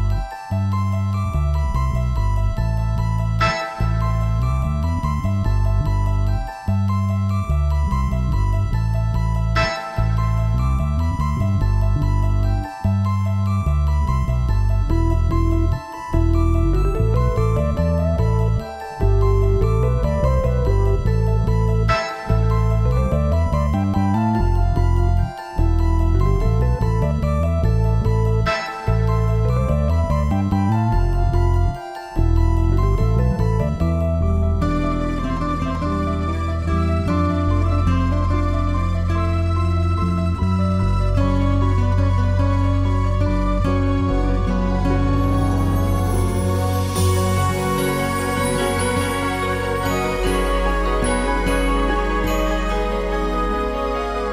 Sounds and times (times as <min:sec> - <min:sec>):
Music: 0:00.0 - 0:54.3.